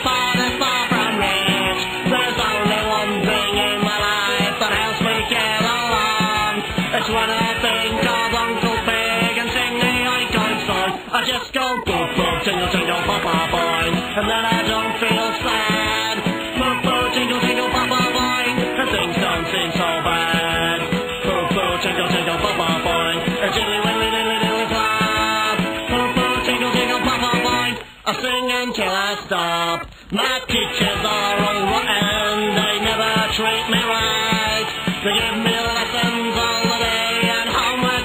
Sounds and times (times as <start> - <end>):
Music: 0.0 - 38.0.